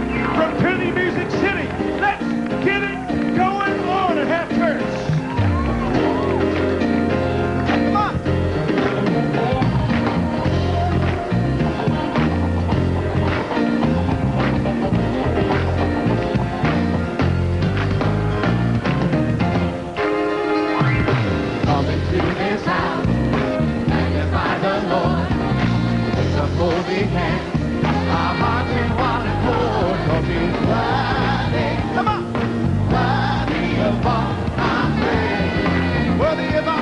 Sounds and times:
Bass guitar: 0.0s - 36.8s.

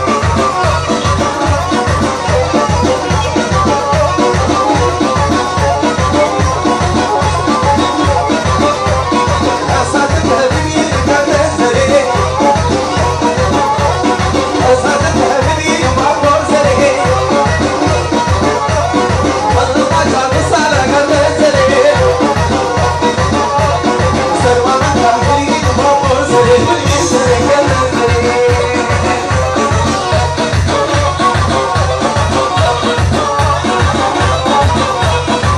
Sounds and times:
Dance music: 0.0s - 35.5s
Funny music: 0.0s - 35.5s.

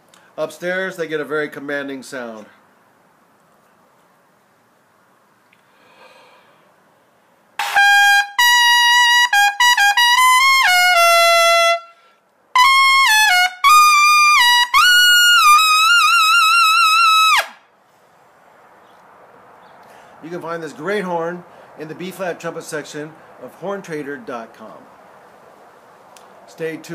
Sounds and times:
Trumpet: 7.6s - 12.0s, 12.6s - 17.6s.

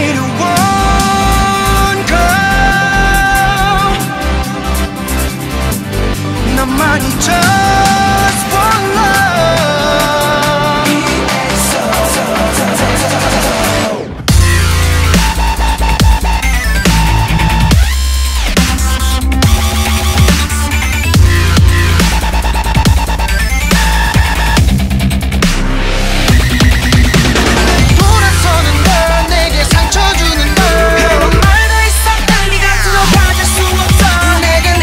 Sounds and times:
Dubstep: 0.0s - 34.8s.

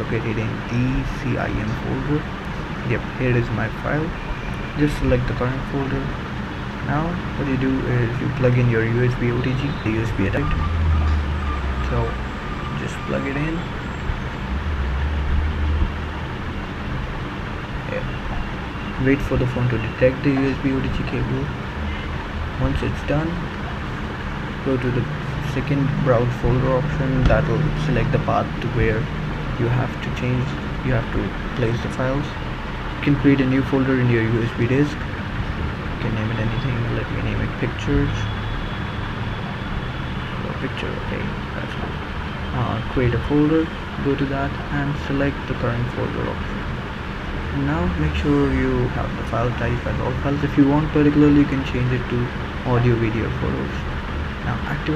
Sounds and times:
Speech: 0.0s - 6.2s, 6.8s - 10.6s, 11.8s - 12.2s, 12.8s - 13.7s, 17.8s - 18.2s, 19.0s - 21.6s, 22.6s - 23.5s, 24.6s - 32.4s, 33.0s - 35.0s, 36.0s - 38.4s, 40.4s - 41.9s, 42.5s - 46.4s, 47.5s - 54.9s.

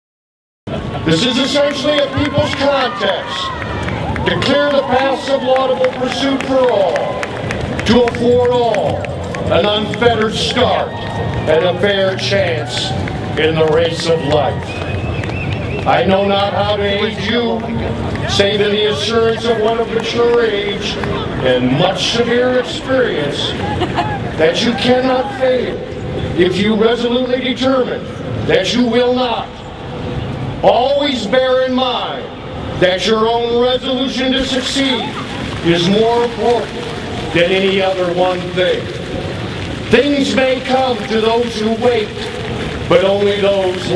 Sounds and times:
Run: 0.7s - 26.4s, 34.4s - 43.9s
Speech: 1.0s - 3.5s, 4.3s - 7.2s, 7.8s - 14.6s, 15.9s - 23.6s, 24.4s - 25.8s, 26.4s - 29.6s, 30.6s - 36.7s, 37.3s - 38.9s, 39.9s - 42.3s, 42.9s - 43.9s.

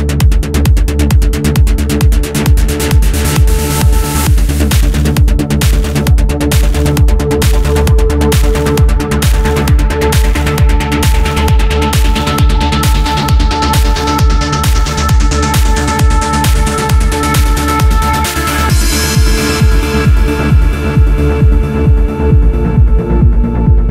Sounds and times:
Music: 0.0s - 23.9s.

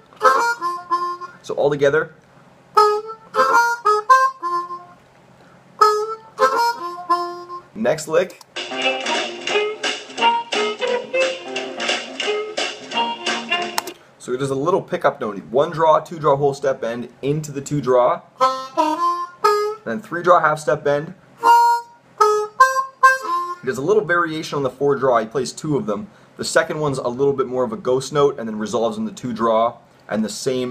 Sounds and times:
Harmonica: 0.0s - 1.5s, 2.7s - 5.0s, 5.8s - 7.8s, 8.6s - 13.8s, 18.4s - 19.9s, 21.4s - 23.8s
Speech: 1.4s - 2.2s, 7.8s - 8.4s, 14.2s - 18.3s, 19.8s - 21.2s, 23.6s - 30.7s.

